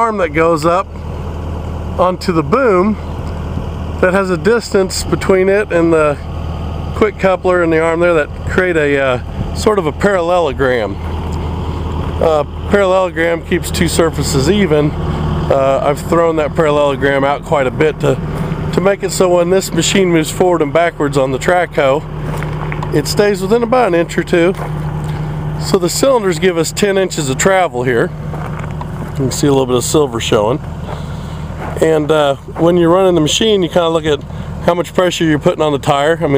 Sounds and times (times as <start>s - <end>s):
Speech: 0.0s - 0.9s, 2.0s - 3.1s, 4.0s - 6.3s, 7.0s - 11.0s, 12.2s - 22.1s, 22.9s - 24.6s, 25.6s - 28.2s, 29.1s - 30.6s, 31.7s - 36.3s.